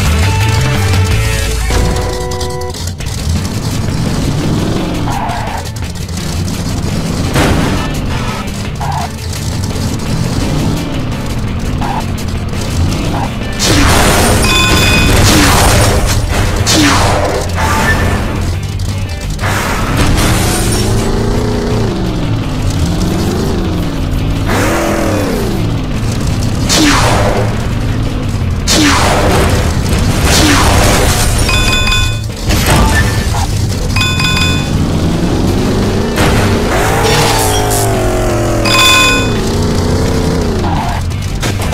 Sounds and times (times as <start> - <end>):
Car: 0.0 - 41.7
Music: 0.0 - 41.7.